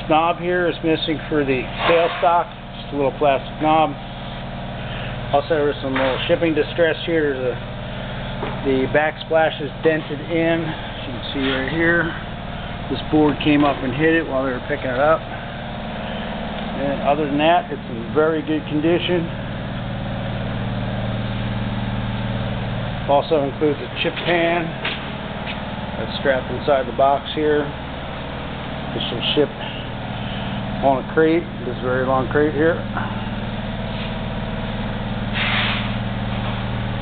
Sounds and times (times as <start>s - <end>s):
Speech: 0.0s - 4.0s, 5.3s - 7.6s, 8.6s - 12.2s, 12.9s - 15.3s, 16.8s - 19.4s, 23.1s - 24.8s, 26.0s - 27.8s, 28.9s - 29.8s, 30.8s - 33.0s.